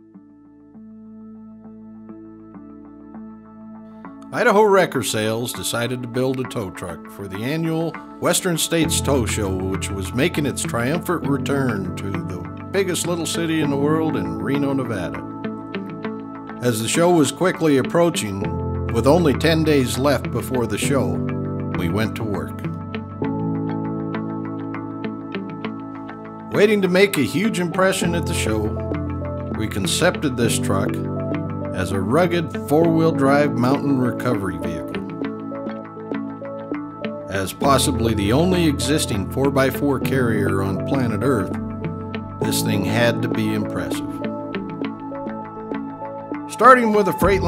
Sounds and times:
Music: 0.0s - 47.4s
Speech: 4.3s - 15.2s, 16.6s - 21.2s, 21.8s - 22.7s, 26.5s - 28.8s, 29.6s - 31.1s, 31.8s - 35.0s, 37.3s - 41.6s, 42.4s - 44.3s, 46.5s - 47.4s.

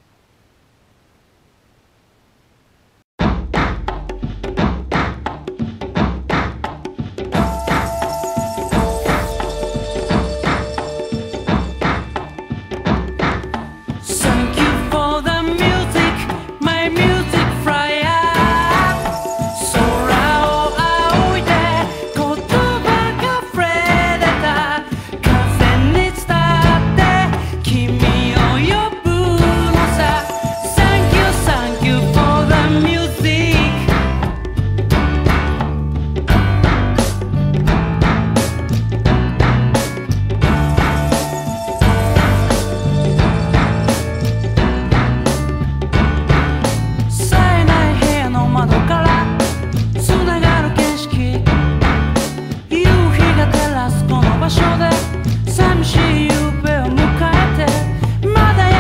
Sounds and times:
Music: 3.2s - 58.8s.

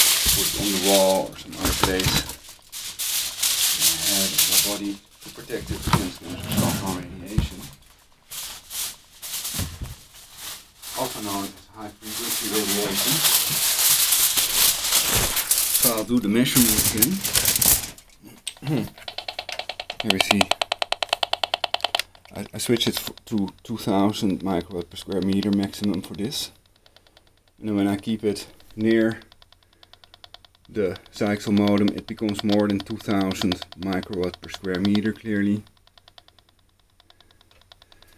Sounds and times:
Typewriter: 12.5s - 38.1s.

